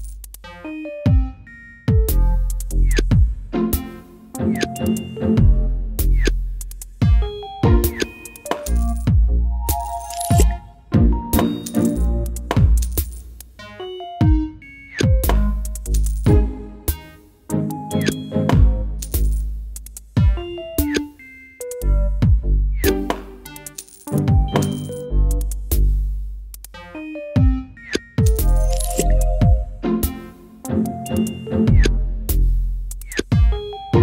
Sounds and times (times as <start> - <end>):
Funny music: 0.0 - 6.4, 7.0 - 19.4, 20.2 - 25.7, 26.8 - 34.0.